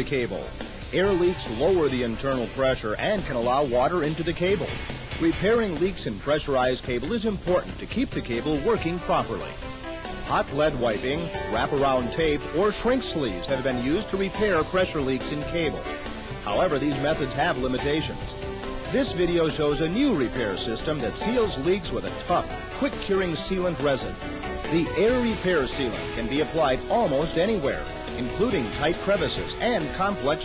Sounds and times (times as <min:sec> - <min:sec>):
Speech: 0:00.0 - 0:09.6, 0:10.3 - 0:30.4
Music: 0:00.0 - 0:30.4.